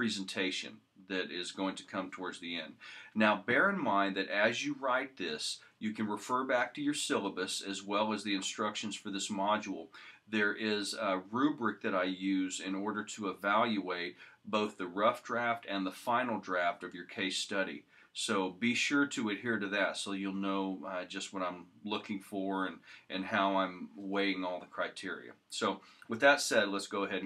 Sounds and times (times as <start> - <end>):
Speech: 0.0 - 27.2.